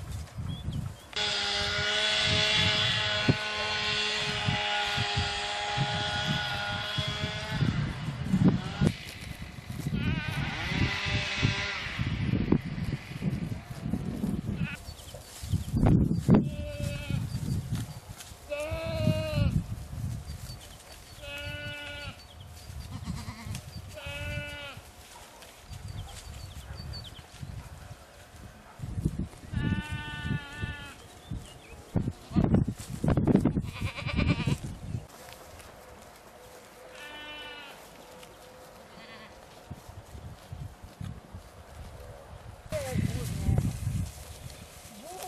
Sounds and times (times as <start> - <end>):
Goat: 13.0 - 19.6, 20.2 - 45.2.